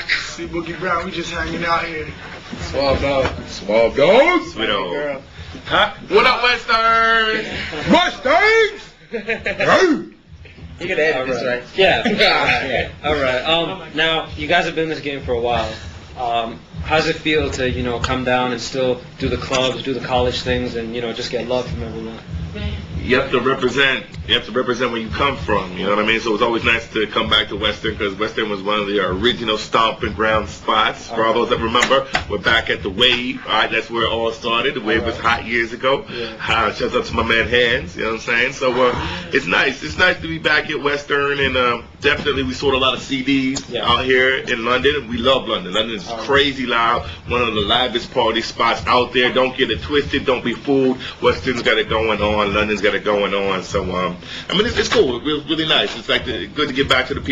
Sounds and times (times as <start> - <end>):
Speech: 10.8 - 57.3.